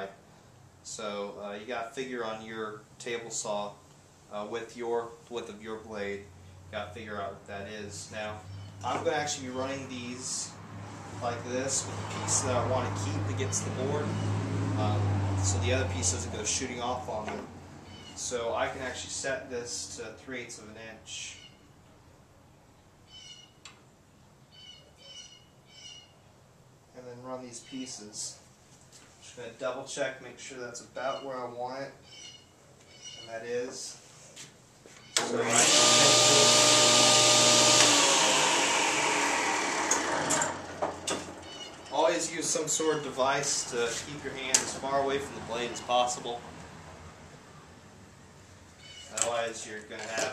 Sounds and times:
Speech: 0.0s - 0.2s, 0.8s - 10.6s, 11.2s - 14.1s, 14.8s - 17.5s, 18.2s - 21.4s, 27.0s - 28.4s, 29.2s - 32.0s, 33.2s - 34.0s, 41.9s - 46.4s, 49.1s - 50.3s.

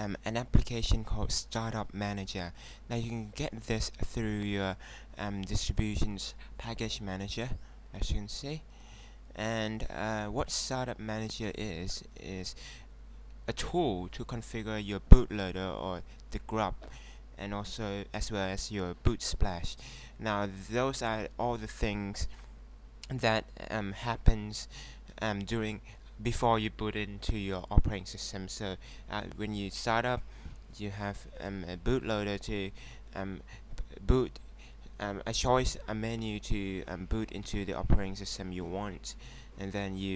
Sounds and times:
Speech: 0.0s - 8.7s, 9.4s - 12.6s, 13.5s - 16.8s, 17.4s - 22.4s, 23.0s - 30.2s, 30.8s - 34.4s, 35.0s - 40.1s.

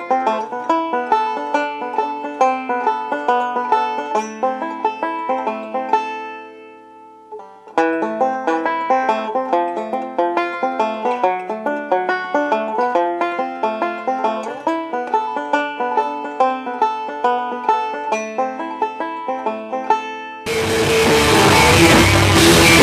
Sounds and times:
Drum: 20.5s - 22.8s
Drum kit: 20.5s - 22.8s.

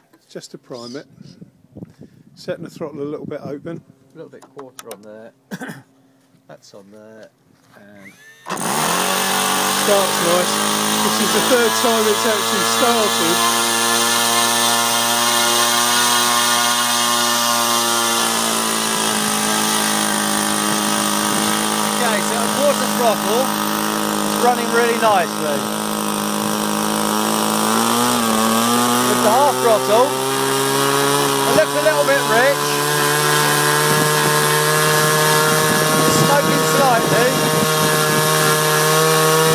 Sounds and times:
Speech: 0.2s - 1.2s, 2.4s - 5.4s, 6.5s - 8.1s, 9.8s - 13.4s, 22.0s - 23.5s, 24.4s - 25.6s, 29.1s - 30.1s, 31.5s - 32.7s, 36.1s - 37.4s
Engine: 7.8s - 39.5s.

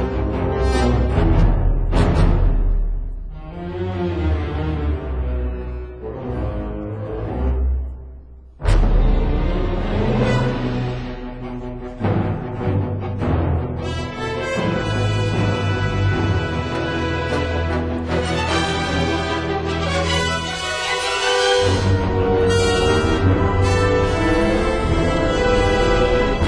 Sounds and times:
Theme music: 0.0s - 26.4s.

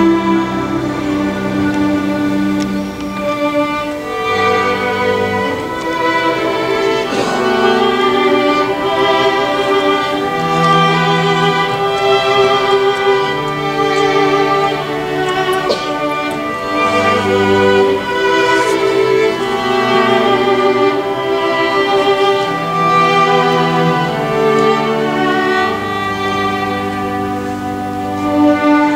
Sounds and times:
Orchestra: 0.0s - 28.9s
Soul music: 0.0s - 28.9s.

